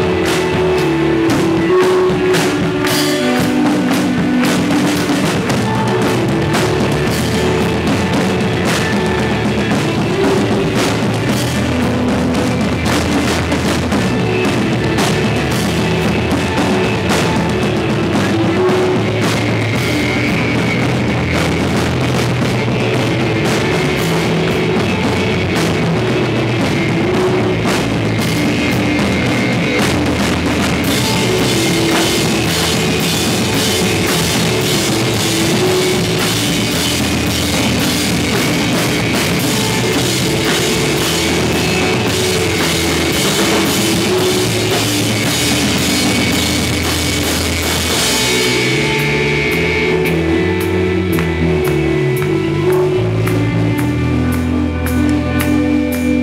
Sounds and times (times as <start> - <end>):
Music: 0.0 - 56.2.